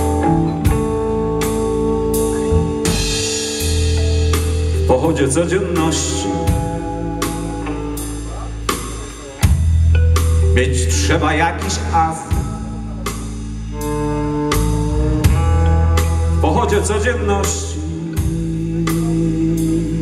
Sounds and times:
Electric guitar: 0.0s - 20.0s.

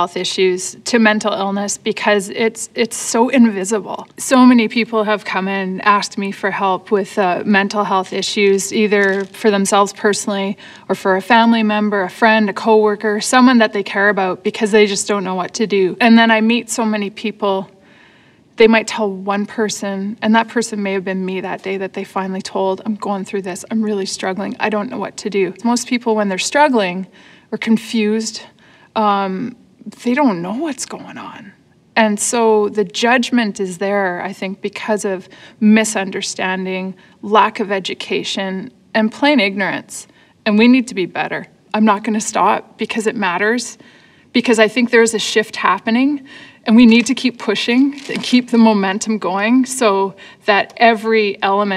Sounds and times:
Speech: 0.0s - 17.7s, 18.6s - 43.8s, 44.4s - 51.7s.

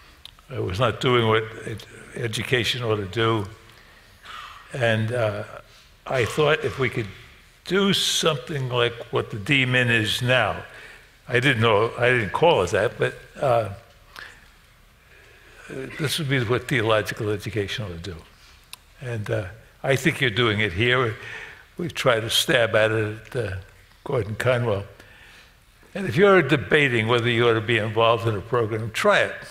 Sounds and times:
Speech: 0.5s - 3.6s, 4.7s - 13.9s, 15.6s - 18.3s, 19.0s - 21.2s, 21.8s - 25.0s, 26.0s - 29.5s.

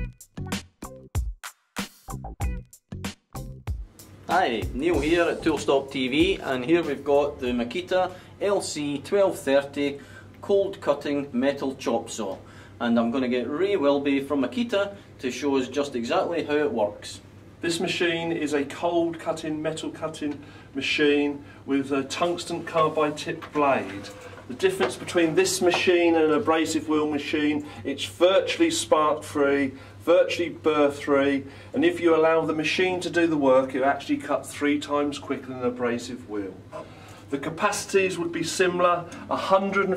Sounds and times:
Speech: 4.3s - 36.6s, 37.3s - 39.9s.

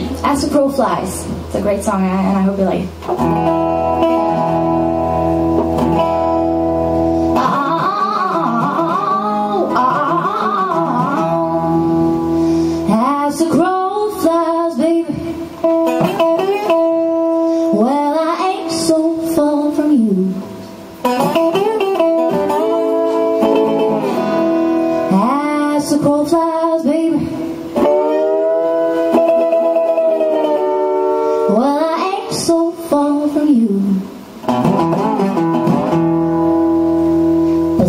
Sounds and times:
Music: 0.0s - 37.8s.

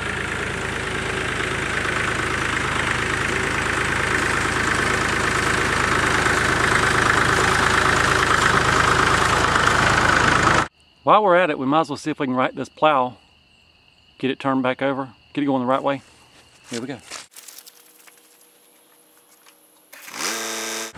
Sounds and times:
Vehicle: 0.0s - 10.7s, 16.2s - 20.9s
Outside, rural or natural: 0.0s - 20.9s
Speech: 11.1s - 13.2s, 14.2s - 16.0s, 16.7s - 17.1s.

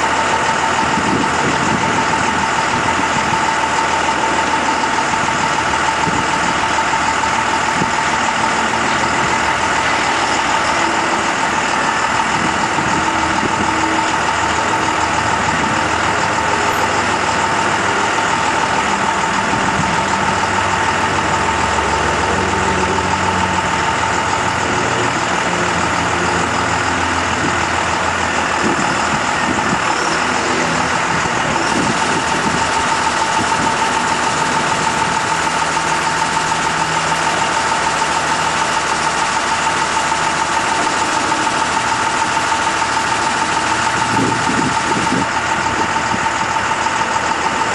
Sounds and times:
Outside, urban or manmade: 0.0s - 47.7s
Truck: 0.0s - 47.7s.

